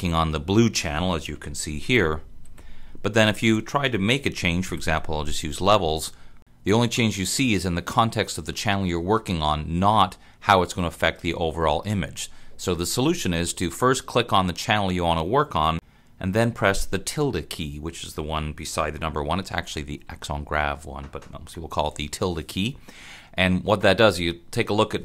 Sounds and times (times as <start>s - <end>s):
Speech: 0.0s - 2.2s, 3.0s - 22.8s, 23.4s - 25.0s.